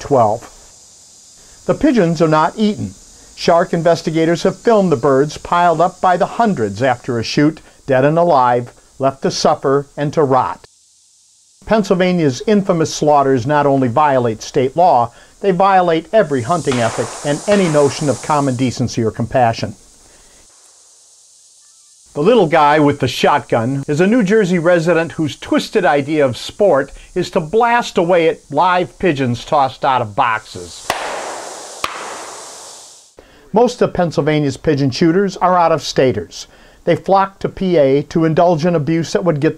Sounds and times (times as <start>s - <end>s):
Speech: 0.0s - 0.6s, 1.7s - 10.7s, 11.6s - 19.8s, 22.2s - 30.9s, 33.5s - 39.5s.